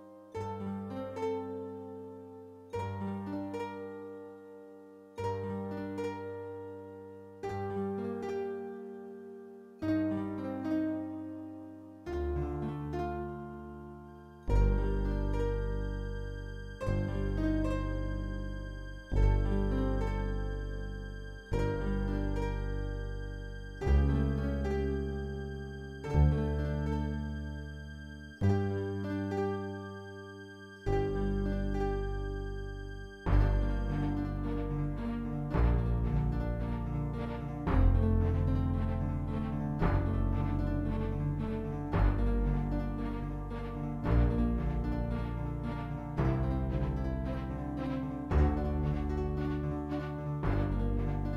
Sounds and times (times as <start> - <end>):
Music: 0.0 - 51.3.